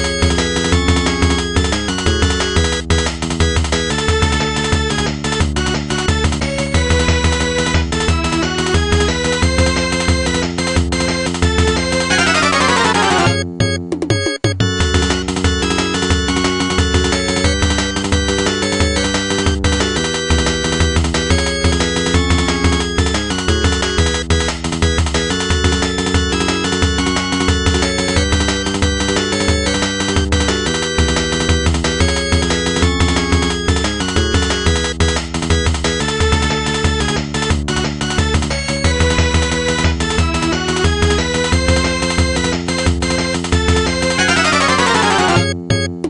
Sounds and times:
Music: 0:00.0 - 0:46.0.

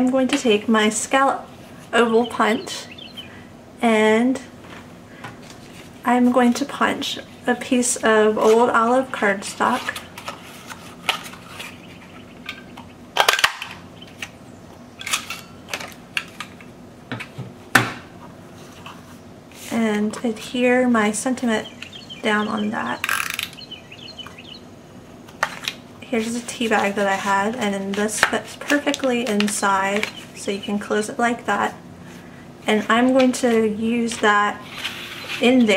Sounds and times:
Speech: 0:00.0 - 0:02.9, 0:03.8 - 0:04.5, 0:06.0 - 0:10.0, 0:19.7 - 0:23.1, 0:26.0 - 0:31.8, 0:32.6 - 0:34.6, 0:35.4 - 0:35.7
Chirp, tweet: 0:02.0 - 0:03.4, 0:11.6 - 0:13.0, 0:21.6 - 0:24.7, 0:30.0 - 0:30.8.

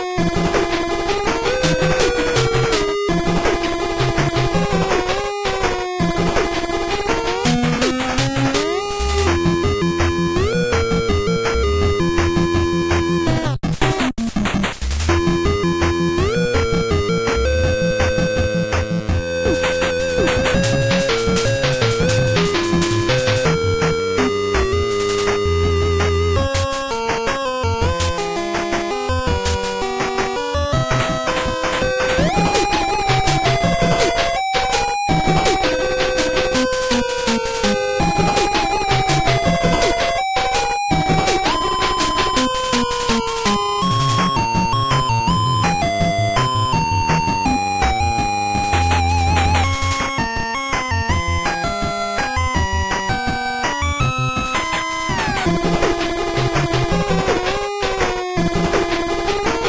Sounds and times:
Video game music: 0:00.0 - 0:59.6.

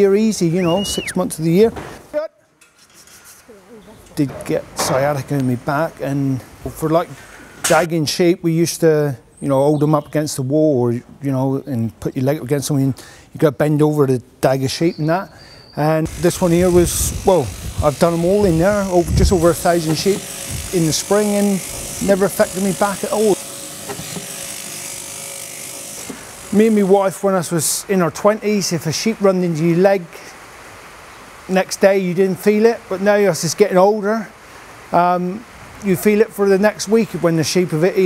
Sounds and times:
Speech: 0:00.0 - 0:02.4, 0:03.5 - 0:23.4, 0:26.6 - 0:30.4, 0:31.5 - 0:34.3, 0:35.0 - 0:38.0
Electric shaver, electric razor: 0:16.1 - 0:27.1.

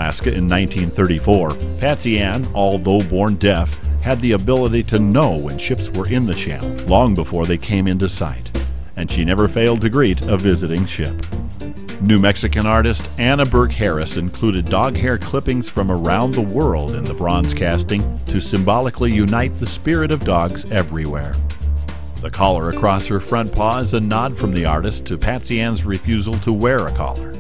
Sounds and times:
Speech: 0:00.0 - 0:11.2, 0:12.0 - 0:21.4, 0:22.2 - 0:27.4
Music: 0:00.0 - 0:27.4.

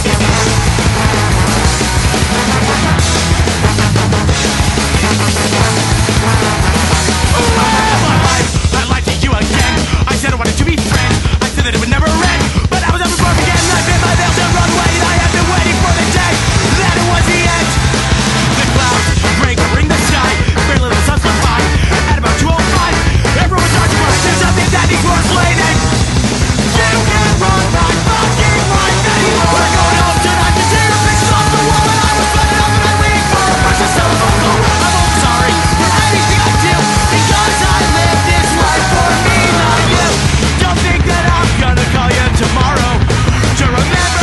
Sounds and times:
Music: 0:00.0 - 0:44.2.

